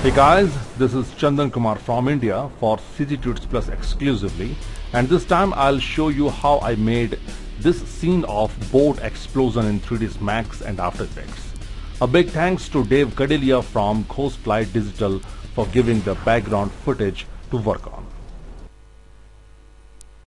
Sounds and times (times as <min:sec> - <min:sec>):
Music: 0:00.0 - 0:01.1, 0:03.0 - 0:18.7
Speech: 0:00.0 - 0:18.1.